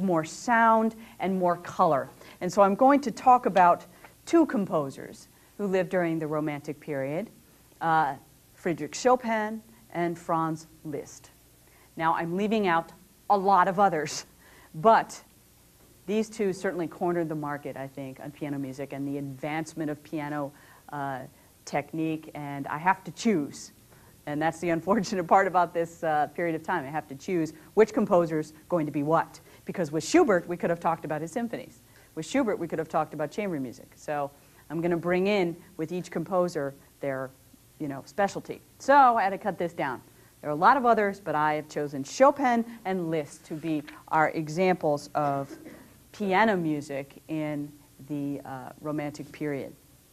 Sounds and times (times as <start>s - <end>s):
Speech: 0.0s - 11.4s, 12.0s - 15.3s, 16.1s - 49.8s.